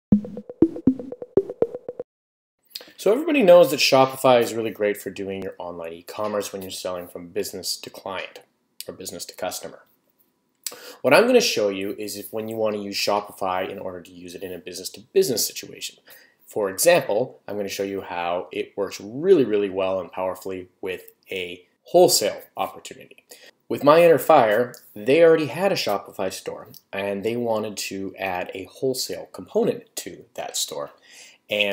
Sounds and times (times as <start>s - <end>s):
Speech: 2.8s - 9.9s, 11.0s - 31.7s.